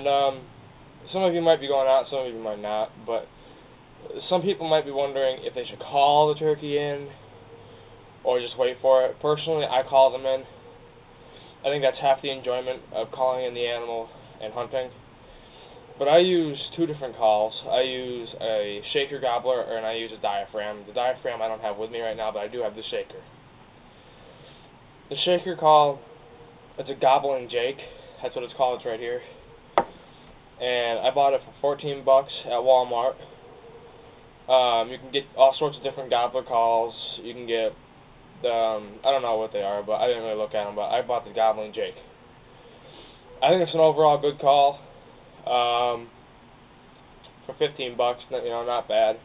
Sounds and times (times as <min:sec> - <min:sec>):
Speech: 0:00.0 - 0:00.5, 0:01.1 - 0:03.3, 0:04.0 - 0:07.2, 0:08.2 - 0:10.5, 0:11.6 - 0:15.0, 0:16.0 - 0:23.3, 0:25.1 - 0:26.0, 0:26.8 - 0:29.4, 0:30.6 - 0:33.3, 0:34.5 - 0:37.8, 0:38.4 - 0:42.1, 0:43.4 - 0:44.8, 0:45.4 - 0:46.2, 0:47.4 - 0:49.2.